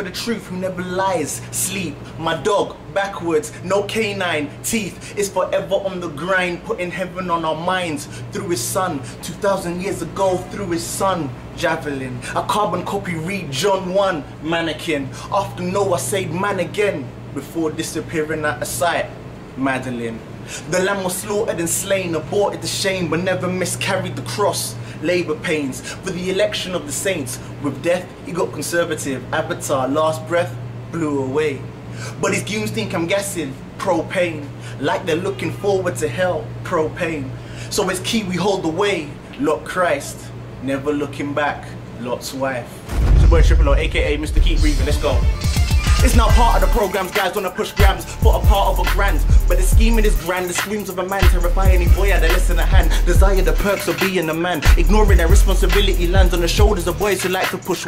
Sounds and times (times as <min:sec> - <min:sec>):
Speech: 0:00.0 - 0:45.3, 0:46.0 - 0:57.8.